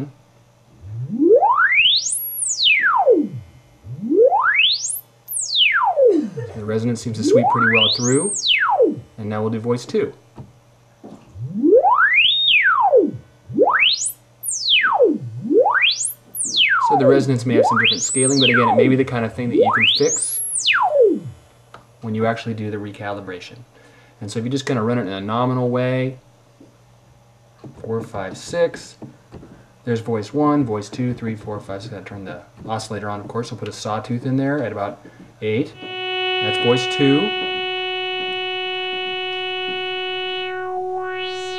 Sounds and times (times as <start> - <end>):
Inside, small room: 0.0 - 41.5
Speech: 6.4 - 8.4, 9.2 - 10.2, 16.8 - 20.2, 22.0 - 26.2, 27.8 - 29.0, 29.8 - 35.8, 36.4 - 37.4.